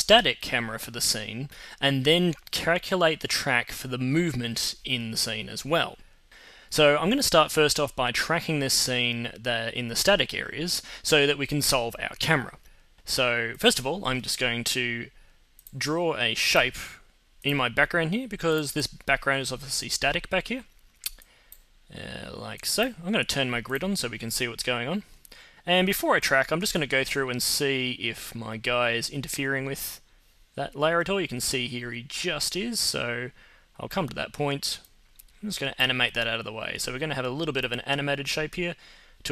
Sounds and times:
Speech: 0.0 - 6.0, 6.7 - 20.7, 21.9 - 39.3.

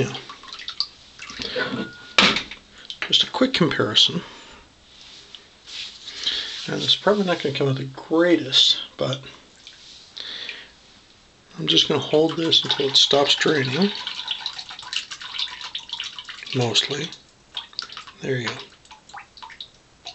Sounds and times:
Speech: 0.0 - 0.3, 3.0 - 4.3, 6.6 - 9.4, 11.5 - 14.0, 16.5 - 17.2, 18.2 - 18.7
Inside, small room: 0.0 - 20.1
Water tap, faucet: 11.7 - 20.1.

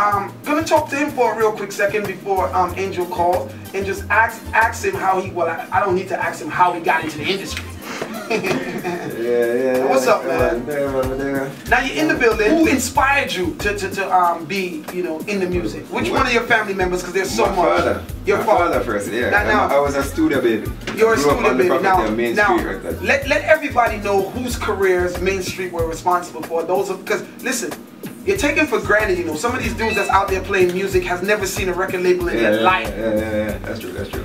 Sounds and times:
Speech: 0.0 - 7.7, 9.1 - 34.2
Music: 0.0 - 34.2.

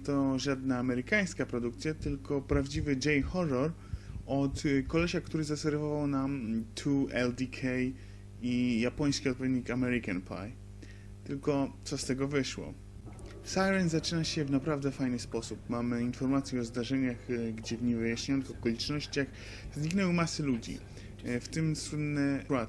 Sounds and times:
Speech: 0.0 - 10.6, 11.2 - 12.8, 13.4 - 22.6.

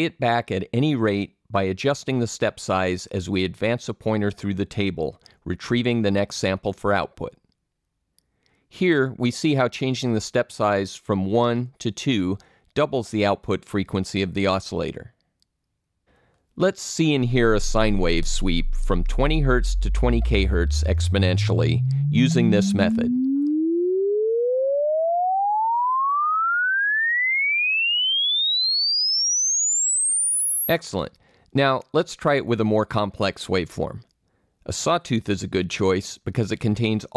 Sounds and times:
Speech: 0.0 - 7.4, 8.7 - 15.2, 16.6 - 23.1, 30.7 - 34.1, 34.7 - 37.1.

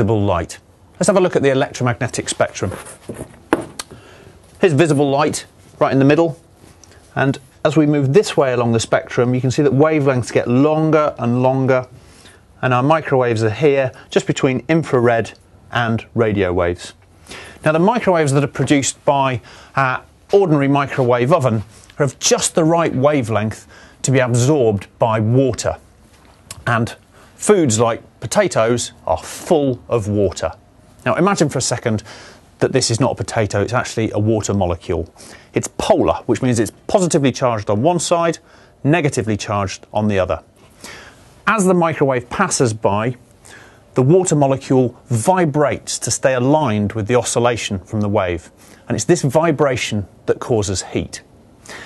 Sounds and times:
Speech: 0.0 - 3.0, 4.6 - 6.4, 7.1 - 12.0, 12.6 - 17.0, 17.6 - 25.9, 26.5 - 40.5, 41.5 - 43.2, 44.0 - 51.3.

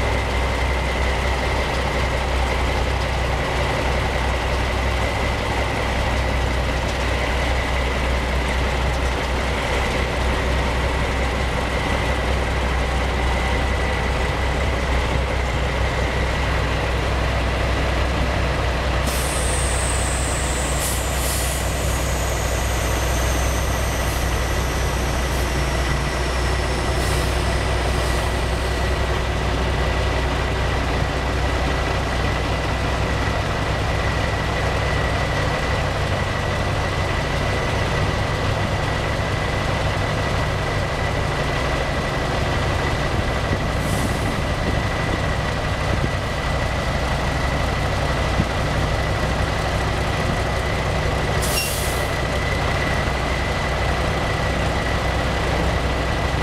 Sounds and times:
Air brake: 19.0 - 24.3, 43.8 - 44.4, 51.4 - 52.1.

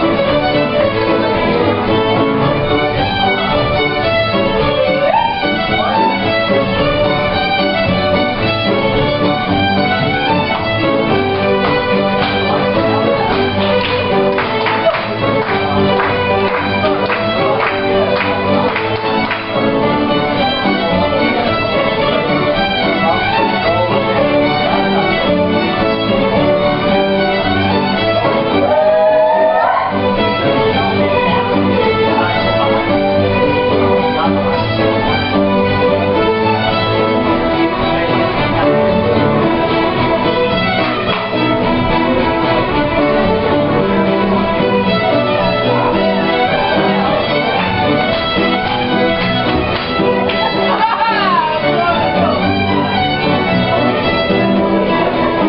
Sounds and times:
Violin, fiddle: 0.0 - 55.4.

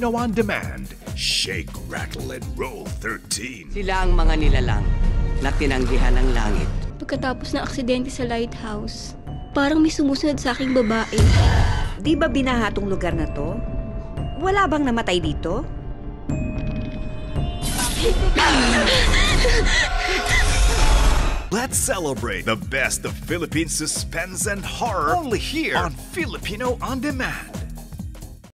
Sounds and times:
Speech: 0.0 - 4.1, 21.5 - 27.6
Music: 0.0 - 28.5.

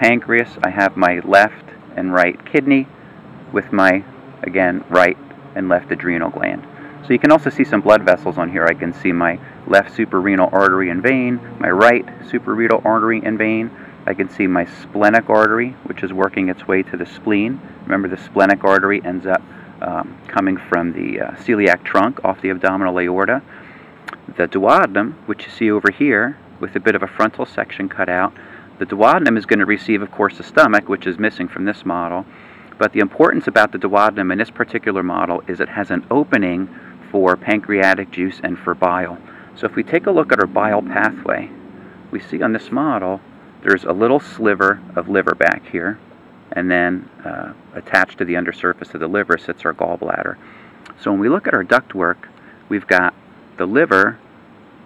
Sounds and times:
Speech: 0.0 - 2.9, 3.5 - 23.5, 24.1 - 41.5, 42.1 - 54.2.

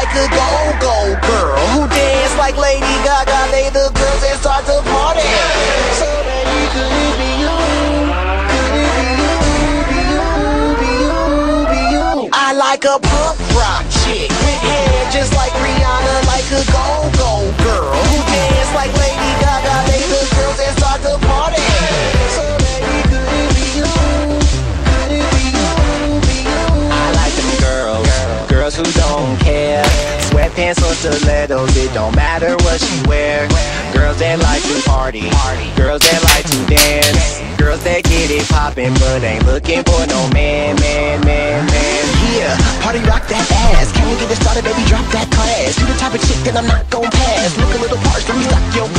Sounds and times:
Rock and roll: 0.0 - 48.9.

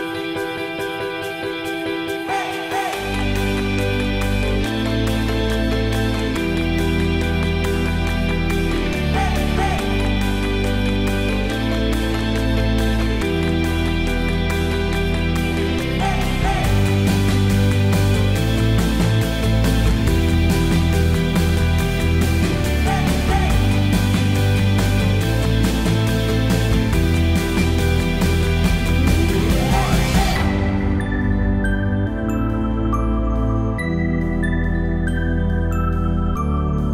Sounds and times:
Music: 0.0 - 36.9.

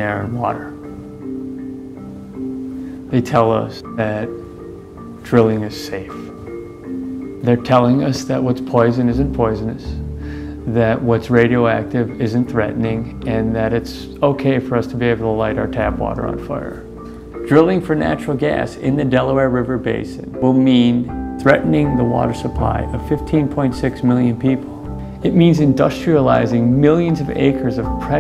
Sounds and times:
Speech: 0.0 - 0.8, 3.1 - 4.4, 5.2 - 6.3, 7.4 - 10.0, 10.7 - 16.9, 17.5 - 28.2
Music: 0.0 - 28.2.

